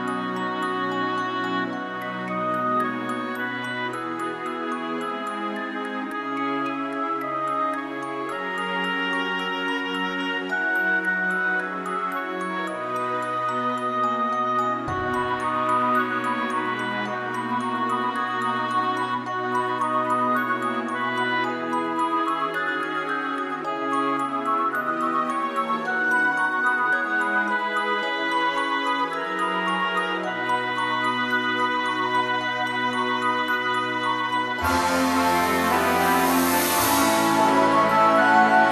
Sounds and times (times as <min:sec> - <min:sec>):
Christmas music: 0:00.0 - 0:38.7.